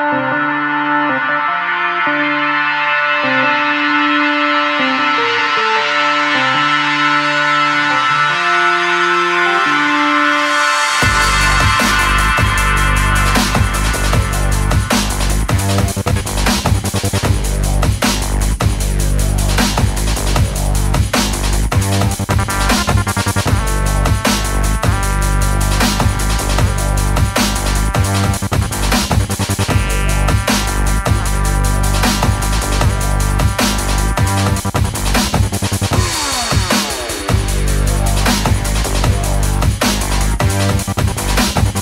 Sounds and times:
Music: 0.0s - 41.8s.

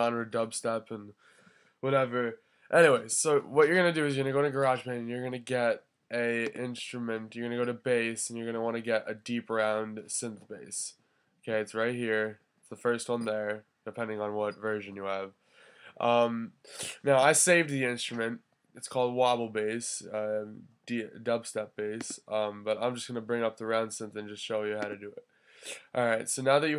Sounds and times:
Speech: 0.0s - 1.1s, 1.8s - 10.9s, 11.5s - 15.3s, 16.0s - 26.7s.

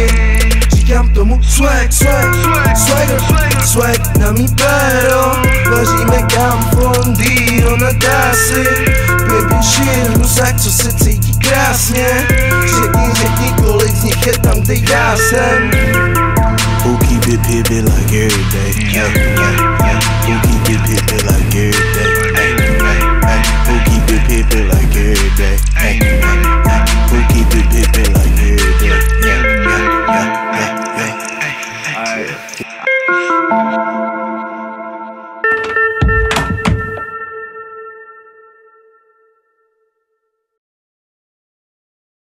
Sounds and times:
Music: 0.0s - 40.2s.

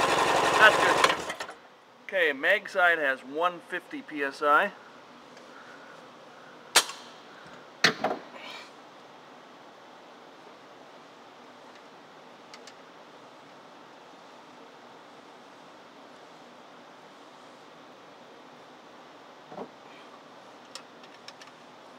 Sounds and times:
Speech: 0.6s - 1.1s, 2.1s - 4.8s.

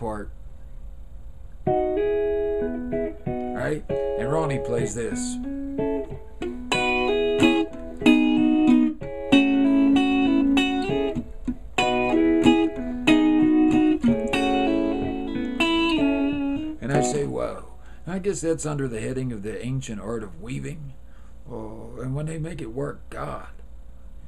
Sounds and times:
Speech: 0.0s - 0.4s, 3.6s - 5.4s, 16.8s - 23.6s
Music: 1.7s - 17.6s.

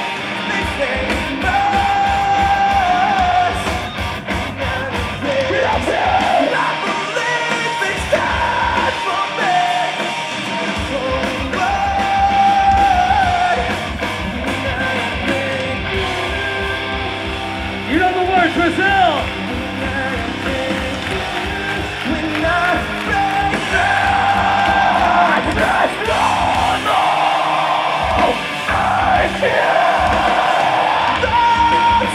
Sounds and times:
Music: 0.0s - 32.1s.

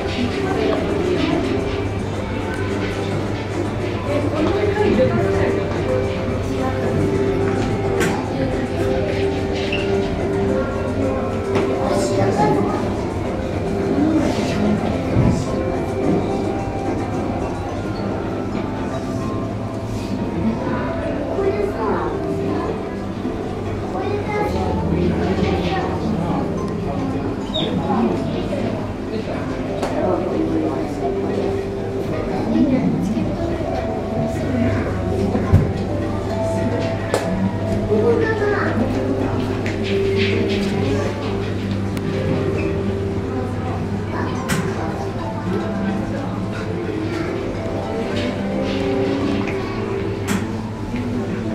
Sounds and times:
Music: 0.0s - 51.5s
Speech: 0.0s - 51.5s.

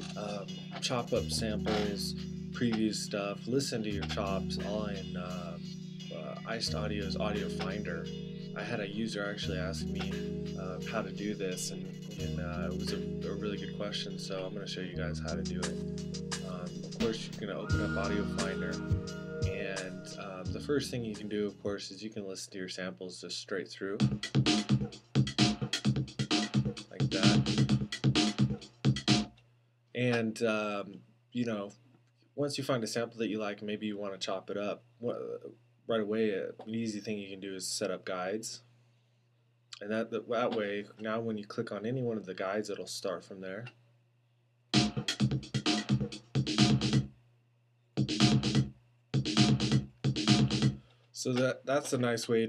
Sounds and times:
Speech: 0.0s - 15.8s, 16.4s - 24.1s, 26.8s - 27.5s, 30.0s - 31.8s, 32.4s - 38.6s, 39.8s - 43.8s, 51.2s - 52.4s
Music: 0.0s - 22.4s, 23.8s - 29.4s, 44.7s - 47.2s, 48.0s - 52.4s.

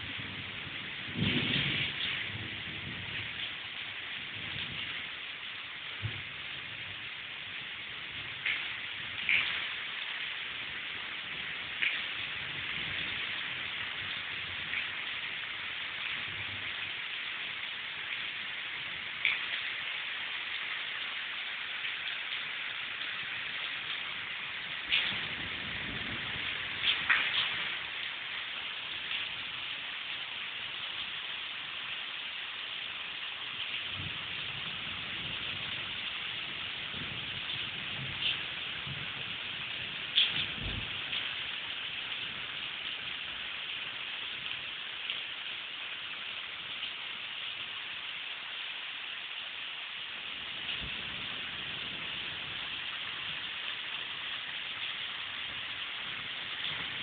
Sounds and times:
Rain on surface: 0.0s - 57.0s
Raindrop: 0.0s - 57.0s.

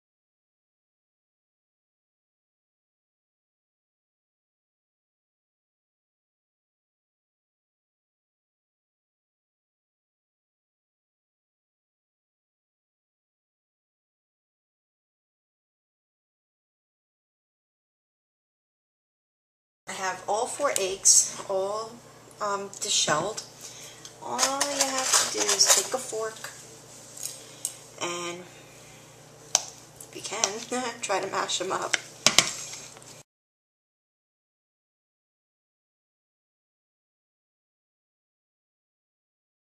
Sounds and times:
Speech: 19.9s - 23.5s, 24.2s - 26.6s, 28.0s - 28.5s, 30.1s - 32.0s.

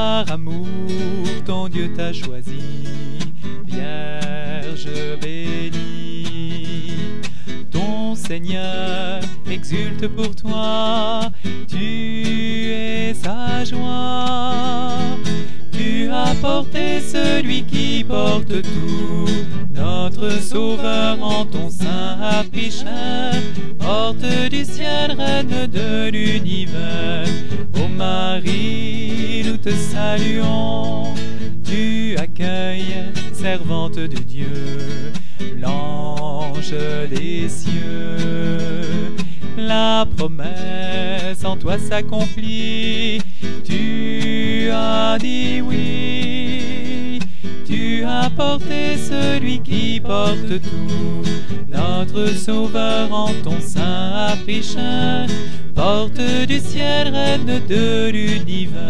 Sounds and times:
Music: 0.0s - 58.8s.

